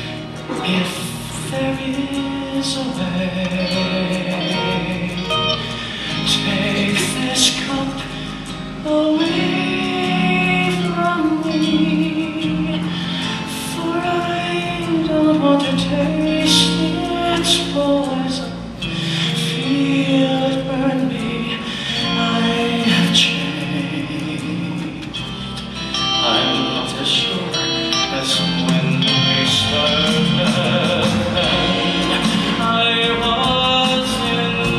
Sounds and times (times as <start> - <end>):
Music: 0.0 - 34.7.